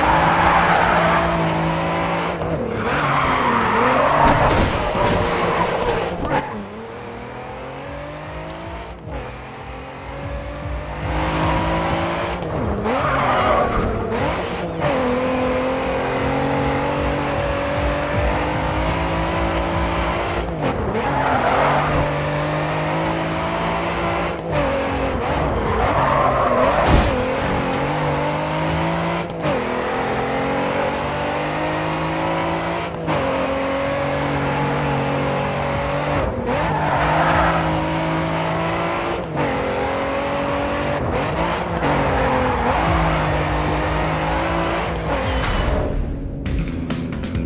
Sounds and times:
Tire squeal: 0:00.0 - 0:01.7, 0:02.7 - 0:06.6, 0:12.9 - 0:14.4, 0:20.9 - 0:22.2, 0:25.2 - 0:27.8, 0:36.5 - 0:38.0, 0:41.9 - 0:43.5
Race car, auto racing: 0:00.0 - 0:47.4.

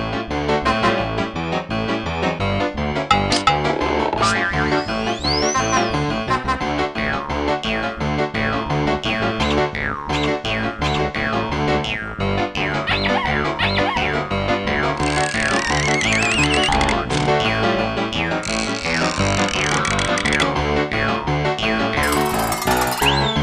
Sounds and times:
Music: 0:00.0 - 0:23.4.

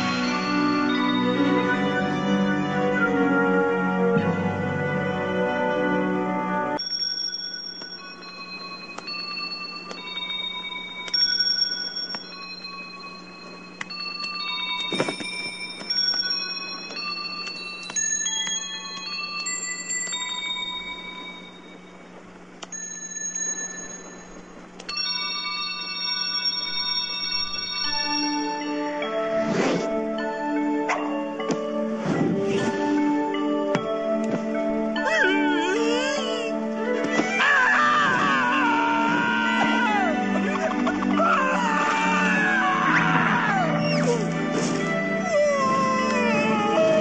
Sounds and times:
Music: 0:00.0 - 0:47.0.

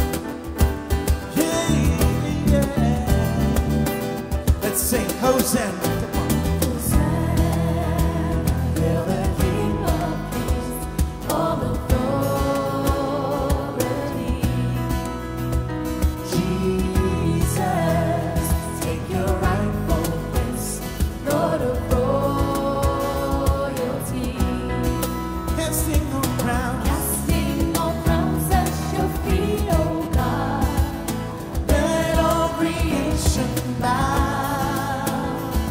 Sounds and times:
Music: 0:00.0 - 0:35.7.

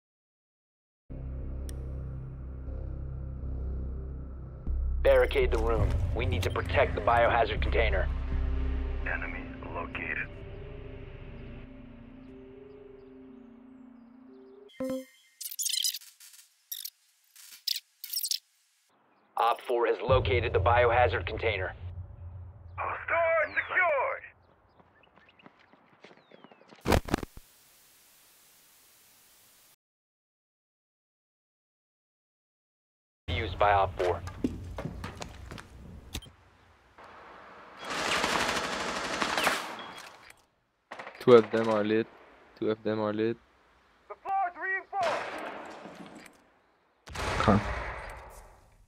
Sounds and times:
Music: 0:01.1 - 0:15.2, 0:20.1 - 0:23.0
Outside, urban or manmade: 0:01.1 - 0:28.8, 0:33.3 - 0:48.8
Speech: 0:05.1 - 0:08.1, 0:09.0 - 0:10.3, 0:19.4 - 0:21.8, 0:22.8 - 0:24.3, 0:33.3 - 0:34.3, 0:41.2 - 0:43.4, 0:44.1 - 0:45.2, 0:47.4 - 0:47.7.

